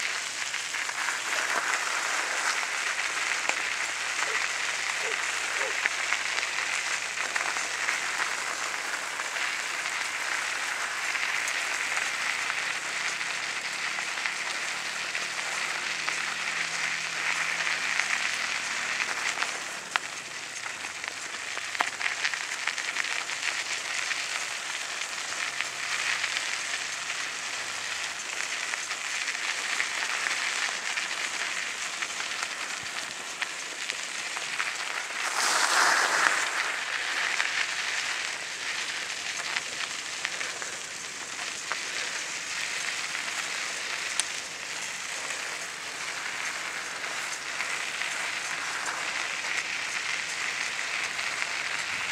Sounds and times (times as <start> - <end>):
Bicycle: 0.0 - 52.1.